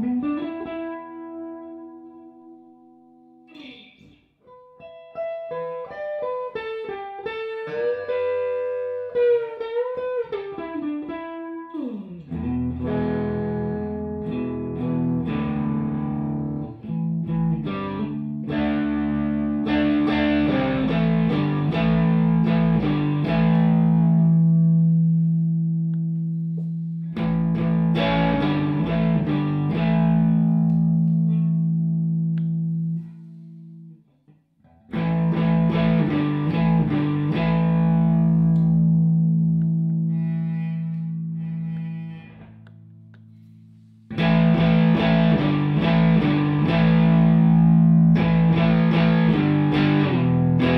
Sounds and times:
Electric guitar: 0.0s - 3.0s, 4.5s - 33.9s, 34.7s - 41.3s, 44.1s - 50.7s
Distortion: 0.0s - 50.7s.

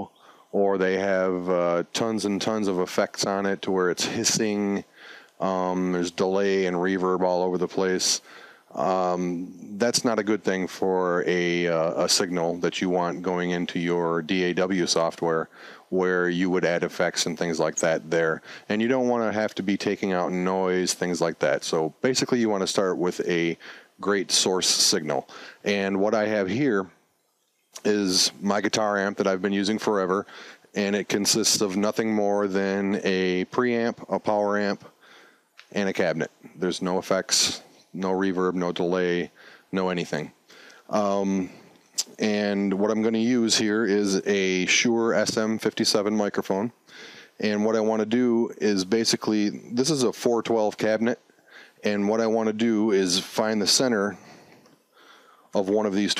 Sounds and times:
Speech: 0.0s - 26.9s, 27.8s - 34.9s, 35.6s - 46.8s, 47.4s - 51.2s, 51.8s - 54.2s, 55.6s - 56.1s.

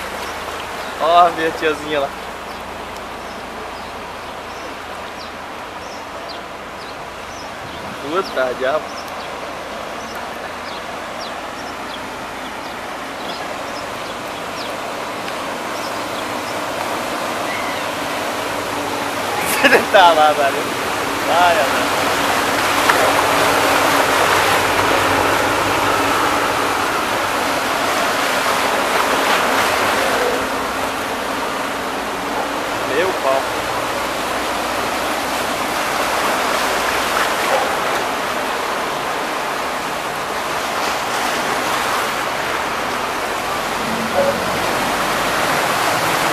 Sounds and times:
Waterfall: 0.0s - 46.3s
Speech: 1.0s - 2.2s, 8.0s - 8.8s, 19.4s - 20.7s, 21.3s - 21.9s, 32.8s - 33.5s.

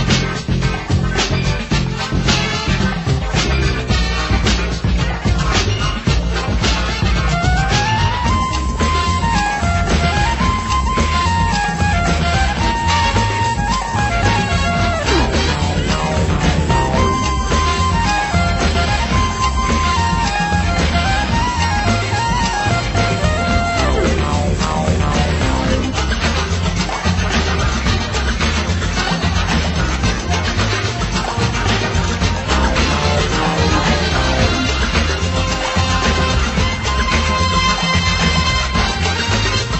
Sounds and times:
Music: 0.0s - 39.7s.

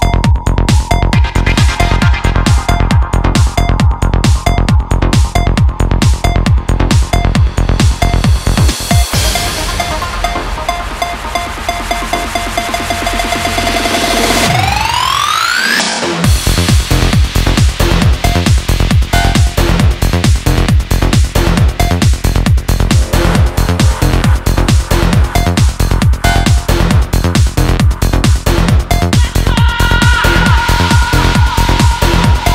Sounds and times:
Electronic dance music: 0.0s - 32.5s.

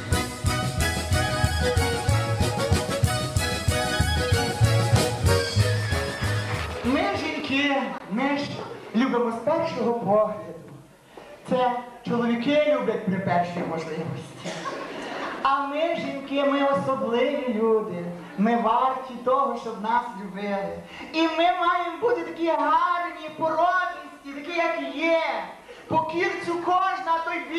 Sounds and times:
Speech: 6.8s - 10.8s, 11.4s - 14.5s, 15.4s - 27.5s.

